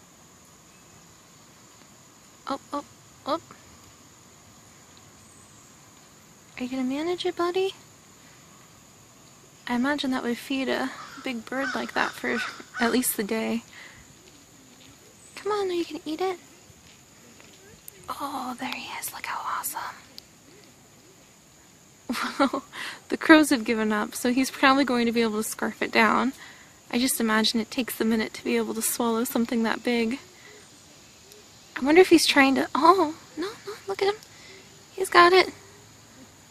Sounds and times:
Speech: 0:06.6 - 0:07.8, 0:09.7 - 0:13.7, 0:15.4 - 0:16.4, 0:23.1 - 0:30.2, 0:31.8 - 0:34.2, 0:35.0 - 0:35.6
Whispering: 0:18.1 - 0:20.1.

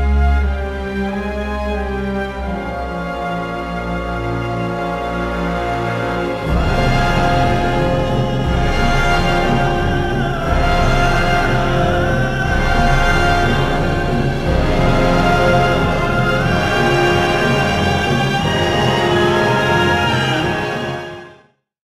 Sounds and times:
Music: 0:00.0 - 0:21.7.

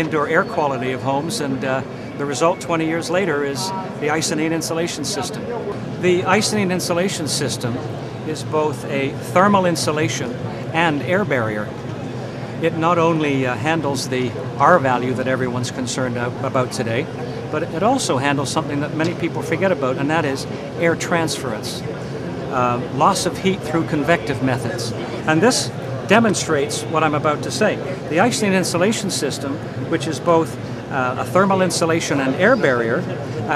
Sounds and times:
Speech: 0:00.0 - 0:11.7, 0:12.6 - 0:21.9, 0:22.5 - 0:33.5.

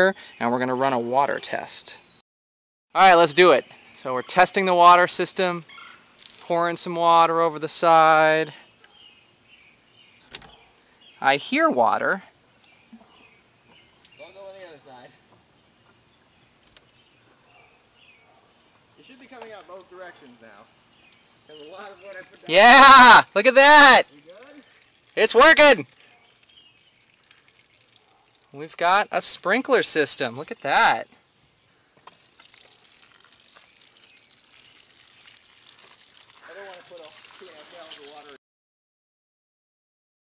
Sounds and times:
Environmental noise: 0:00.0 - 0:02.2, 0:02.9 - 0:38.4
Speech: 0:03.0 - 0:05.6, 0:11.2 - 0:12.2, 0:14.2 - 0:15.2, 0:19.0 - 0:20.7, 0:21.5 - 0:24.6, 0:25.2 - 0:25.9, 0:28.6 - 0:31.1, 0:36.5 - 0:38.4.

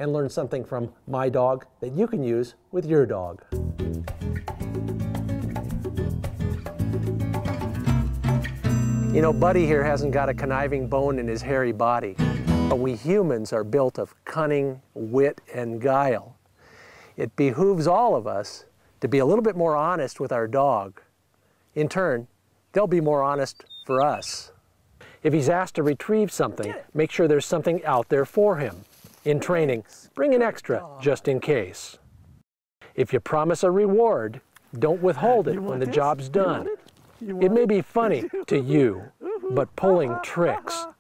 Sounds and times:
Speech: 0:00.0 - 0:03.4, 0:09.1 - 0:16.4, 0:17.2 - 0:21.1, 0:21.8 - 0:24.5, 0:25.2 - 0:32.0, 0:33.0 - 0:41.0
Music: 0:03.5 - 0:13.0.

